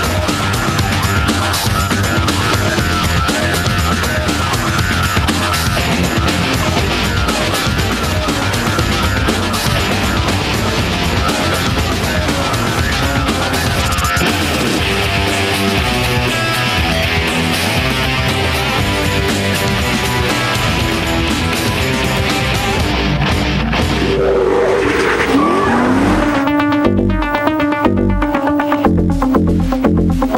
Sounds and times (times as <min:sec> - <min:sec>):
Music: 0:00.0 - 0:30.3.